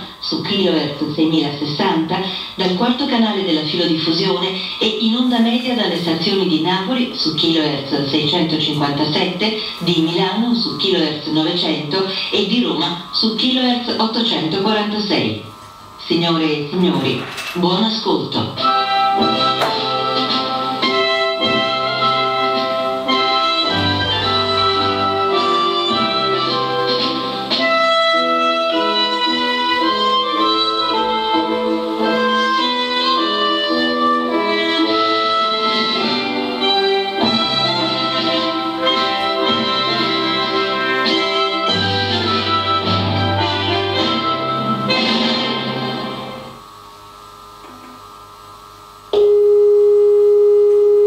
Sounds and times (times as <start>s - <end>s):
Music: 0.0s - 16.0s, 18.3s - 49.4s
Speech: 0.0s - 18.6s.